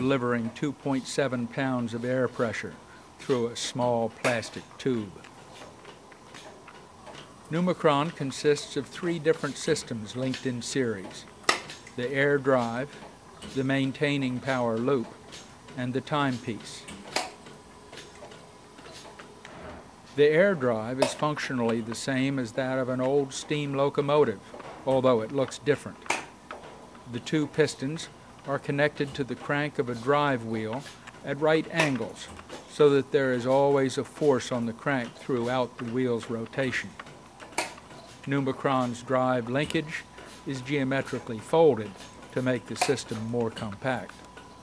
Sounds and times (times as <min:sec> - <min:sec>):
Speech: 0:00.0 - 0:05.2, 0:07.5 - 0:11.3, 0:12.0 - 0:16.9, 0:20.2 - 0:26.0, 0:27.1 - 0:37.0, 0:38.2 - 0:44.2.